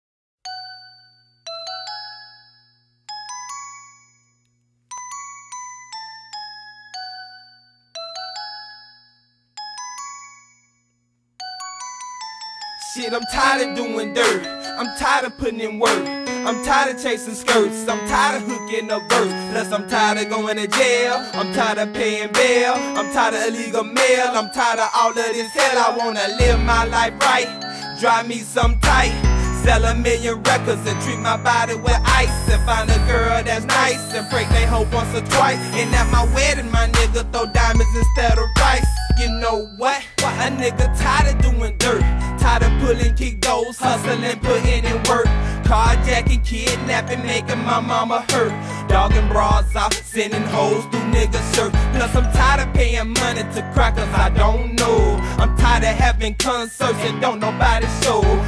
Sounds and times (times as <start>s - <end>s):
Glockenspiel: 0.4s - 58.4s
Marimba, xylophone: 0.5s - 4.2s, 4.9s - 10.7s, 11.4s - 58.4s.